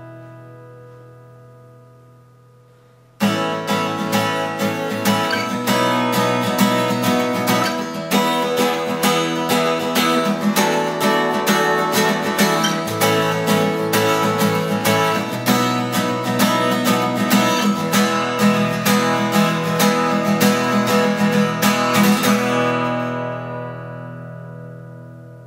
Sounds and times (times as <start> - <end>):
Acoustic guitar: 0.0 - 25.4
Strum: 0.0 - 25.4.